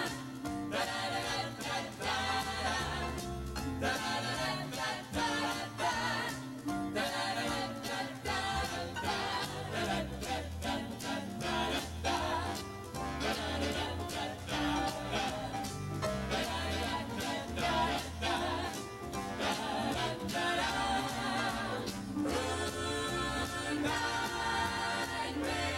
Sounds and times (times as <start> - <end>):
Music: 0.0 - 25.7.